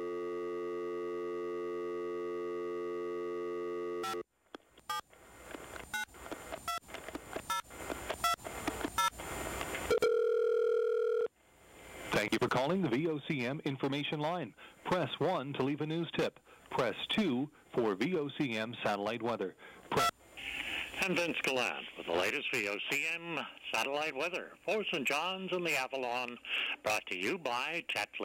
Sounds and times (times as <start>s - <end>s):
Dial tone: 0.0s - 4.2s, 9.9s - 11.3s
Speech: 12.1s - 19.6s, 21.0s - 28.2s.